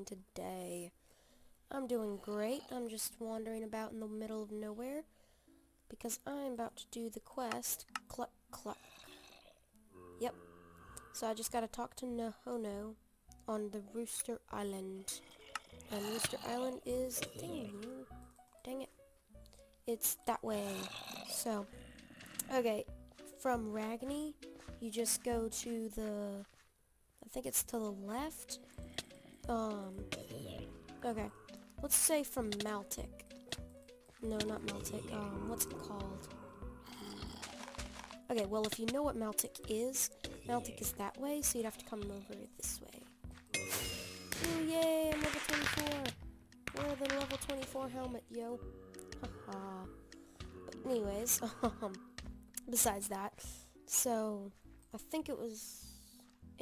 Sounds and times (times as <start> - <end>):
Speech: 0.0 - 0.9, 1.7 - 5.1, 5.9 - 8.8, 11.2 - 15.2, 15.9 - 18.9, 19.9 - 21.7, 22.4 - 26.4, 27.2 - 28.6, 29.5 - 33.2, 34.2 - 36.3, 38.3 - 43.1, 44.4 - 48.6, 49.5 - 49.9, 50.7 - 52.0, 52.6 - 56.6.